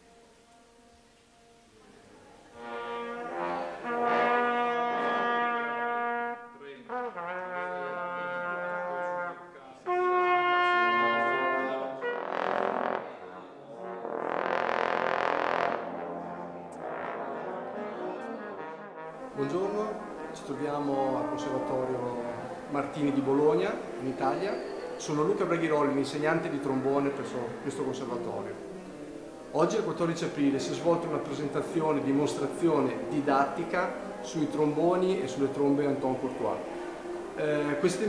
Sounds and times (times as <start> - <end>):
Music: 0.0 - 38.0
Speech: 6.6 - 12.1, 12.9 - 14.0, 19.4 - 28.6, 29.6 - 36.6, 37.4 - 38.0.